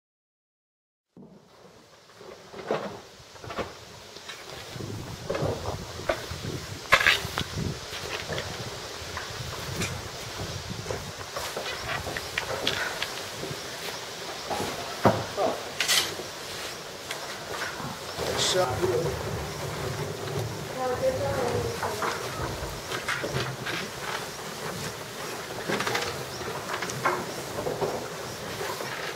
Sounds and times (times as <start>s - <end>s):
Rustling leaves: 1.2s - 29.1s.